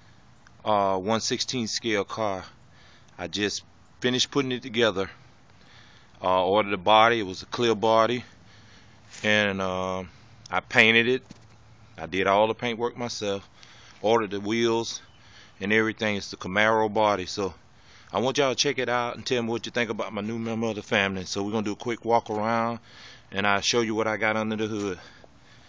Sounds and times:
Speech: 0.6 - 2.6, 3.2 - 5.2, 6.2 - 8.3, 9.2 - 11.2, 12.0 - 15.0, 15.6 - 25.1.

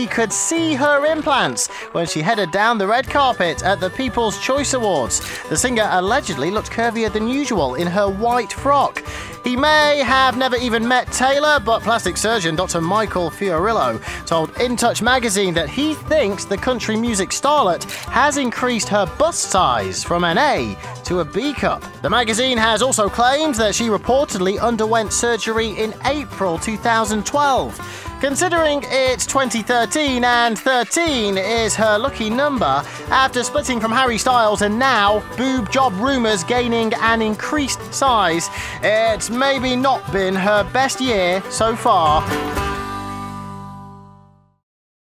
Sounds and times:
Speech: 0.0 - 42.3
Music: 0.0 - 44.6.

